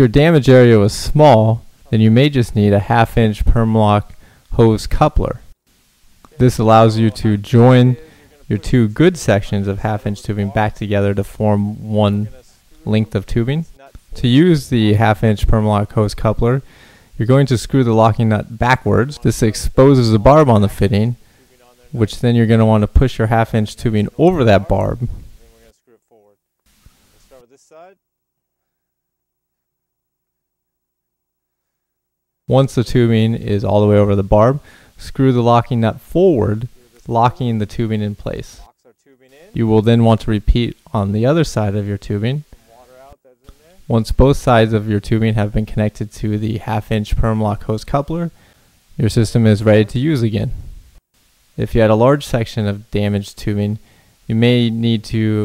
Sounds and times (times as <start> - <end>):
Speech: 0.0 - 5.5, 6.3 - 26.4, 27.2 - 28.0, 32.5 - 48.4, 49.0 - 50.7, 51.6 - 55.4.